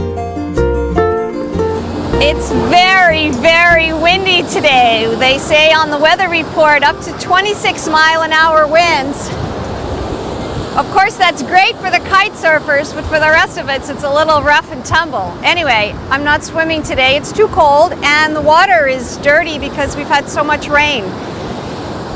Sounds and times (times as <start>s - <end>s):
Speech: 2.2s - 9.3s, 10.8s - 21.1s.